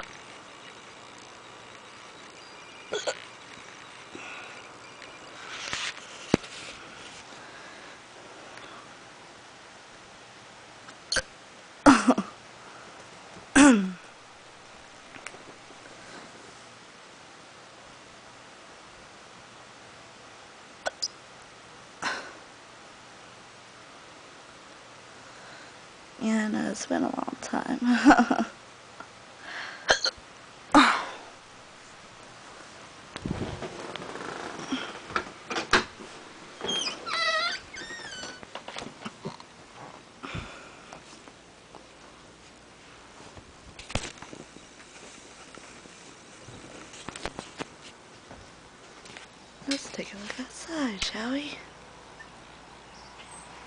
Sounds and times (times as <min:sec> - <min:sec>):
Hiccup: 0:03.0 - 0:03.2, 0:11.1 - 0:11.3, 0:20.8 - 0:21.1, 0:29.9 - 0:30.2.